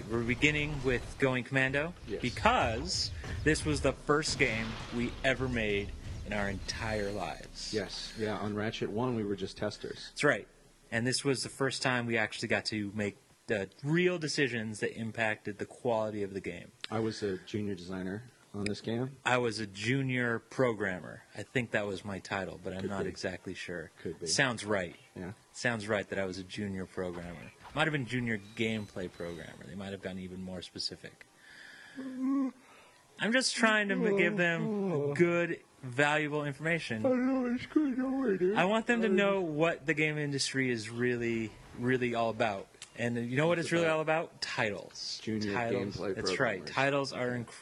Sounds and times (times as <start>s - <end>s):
Speech: 0.0s - 31.2s, 33.2s - 47.6s.